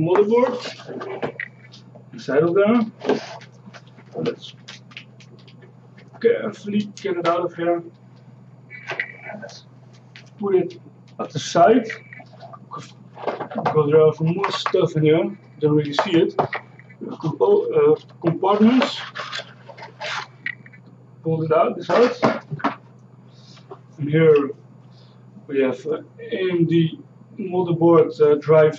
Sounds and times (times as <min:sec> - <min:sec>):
Speech: 0:00.0 - 0:03.4, 0:04.0 - 0:05.0, 0:06.0 - 0:08.0, 0:08.7 - 0:09.6, 0:10.3 - 0:20.7, 0:21.3 - 0:22.7, 0:23.5 - 0:24.6, 0:25.5 - 0:28.7.